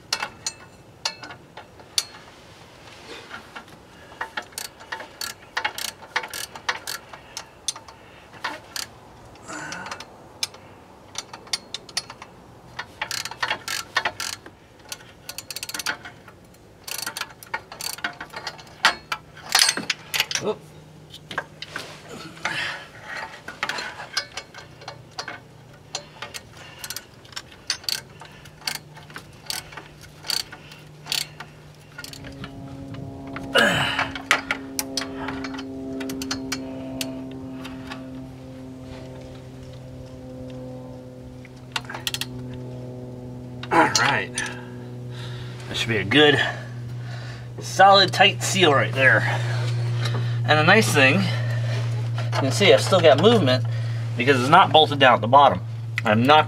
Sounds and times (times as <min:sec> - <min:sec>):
Vehicle: 0:00.0 - 0:56.4.